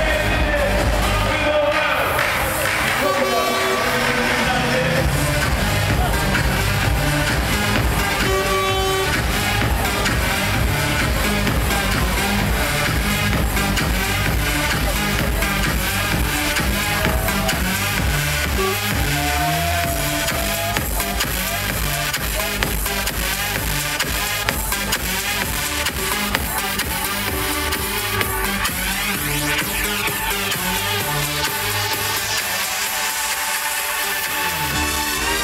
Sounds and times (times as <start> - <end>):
Techno: 0.0 - 35.4.